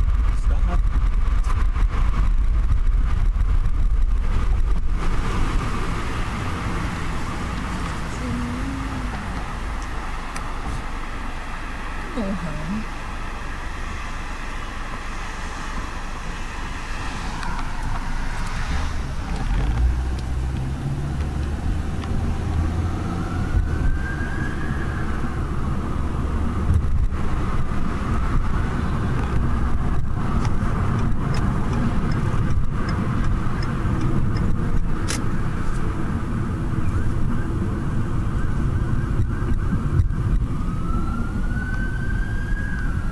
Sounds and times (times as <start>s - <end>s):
Police car (siren): 11.7s - 19.0s, 22.0s - 29.7s, 36.7s - 43.1s.